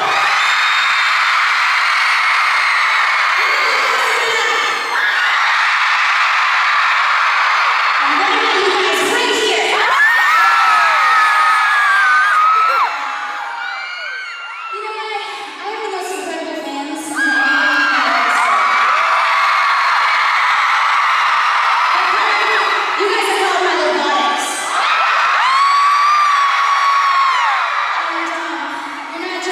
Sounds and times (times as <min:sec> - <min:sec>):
Female speech, woman speaking: 0:03.5 - 0:04.8, 0:08.0 - 0:09.9, 0:14.8 - 0:18.6, 0:22.0 - 0:24.6, 0:28.1 - 0:29.5.